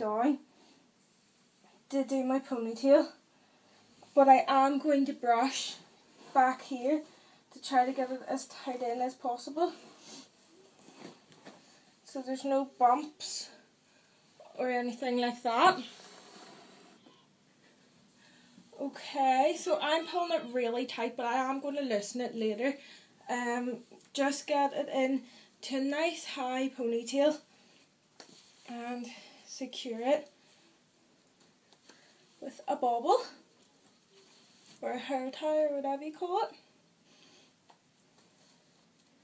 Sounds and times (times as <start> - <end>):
Speech: 0.0 - 0.5, 1.9 - 3.2, 4.2 - 9.8, 12.1 - 13.6, 14.4 - 16.0, 18.8 - 27.4, 28.7 - 30.3, 32.4 - 33.4, 34.8 - 36.7
Inside, small room: 0.0 - 39.2.